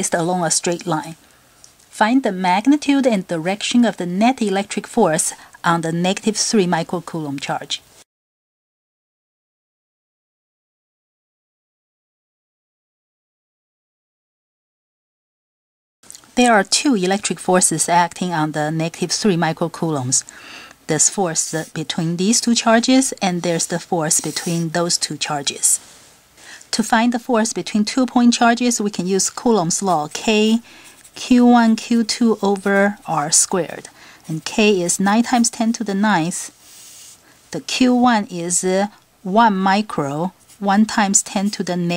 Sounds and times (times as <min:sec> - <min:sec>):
Speech: 0:00.0 - 0:01.2, 0:02.0 - 0:07.8, 0:16.4 - 0:20.3, 0:20.9 - 0:25.8, 0:26.7 - 0:36.5, 0:37.5 - 0:41.9.